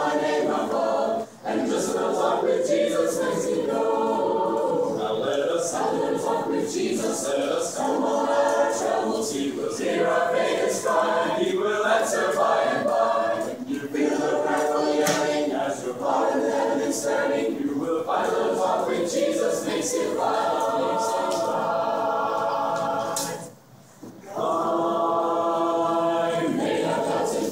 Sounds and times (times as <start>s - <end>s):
Choir: 0.0s - 27.5s.